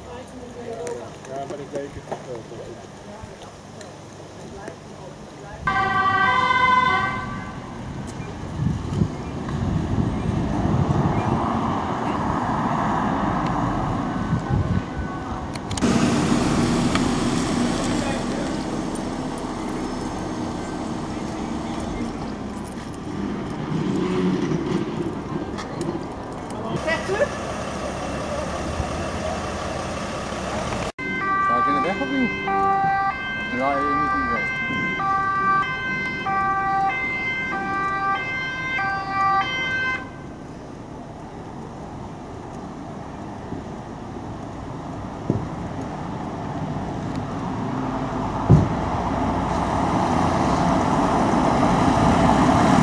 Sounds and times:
Vehicle: 0.0 - 52.8.

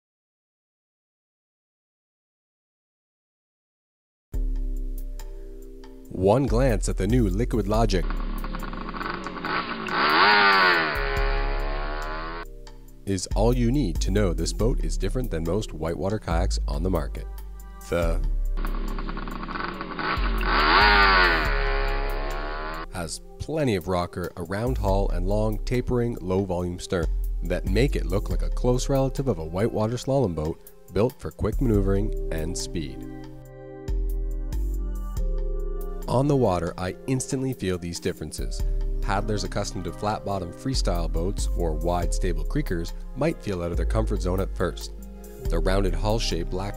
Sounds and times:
Music: 4.3 - 46.7
Speech: 6.1 - 8.1, 13.1 - 18.3, 22.9 - 33.0, 36.1 - 44.9, 45.5 - 46.7.

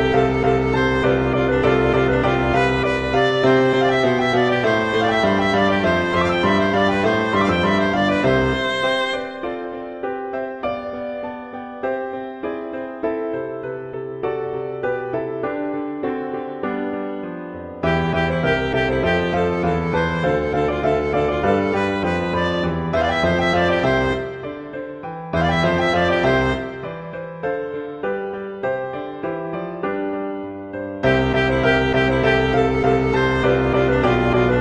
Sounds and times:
Musical instrument: 0.0 - 9.9, 17.8 - 24.8, 25.4 - 27.2, 31.0 - 34.6.

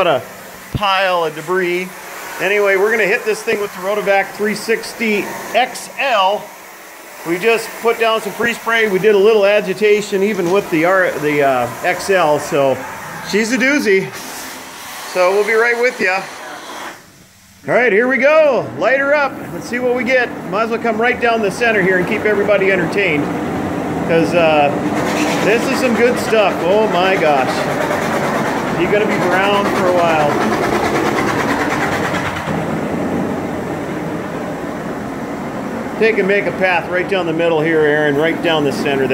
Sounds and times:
Speech: 0.0 - 0.2, 0.8 - 6.5, 7.2 - 14.2, 15.1 - 16.3, 17.7 - 23.3, 24.1 - 24.8, 25.4 - 27.7, 28.8 - 30.4, 36.0 - 39.1.

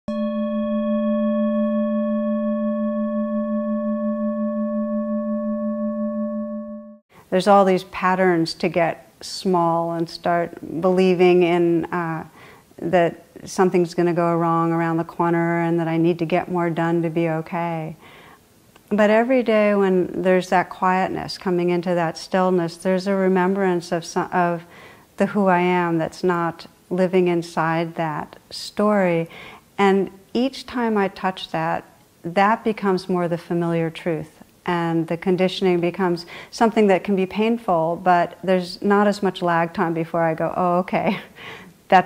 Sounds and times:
Singing bowl: 0.1 - 7.0
Speech: 7.3 - 18.0, 18.9 - 41.3.

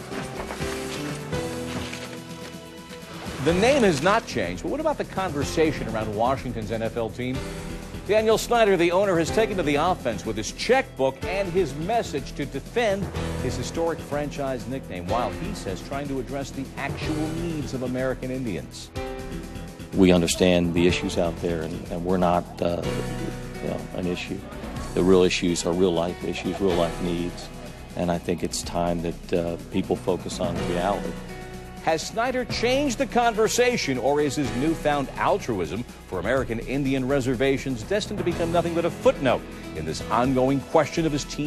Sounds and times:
Music: 0.0 - 41.4
Speech: 3.4 - 7.4, 8.1 - 18.9, 20.0 - 31.2, 31.8 - 41.4.

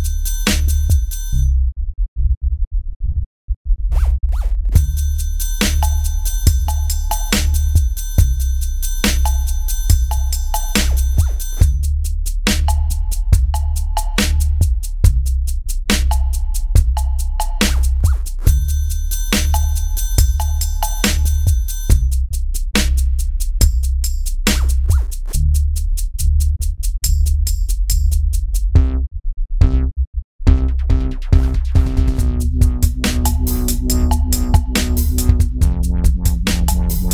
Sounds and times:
Dubstep: 4.0 - 29.0, 30.5 - 37.1.

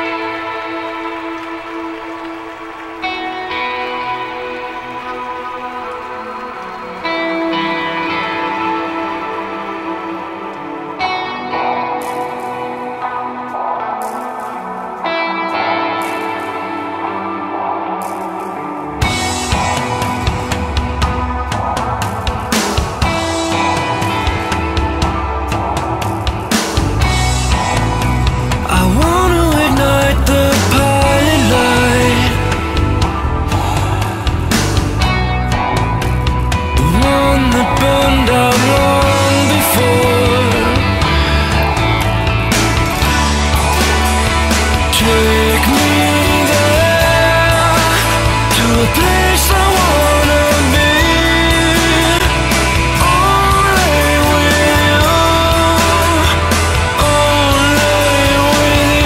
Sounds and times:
Music: 0.0 - 59.0.

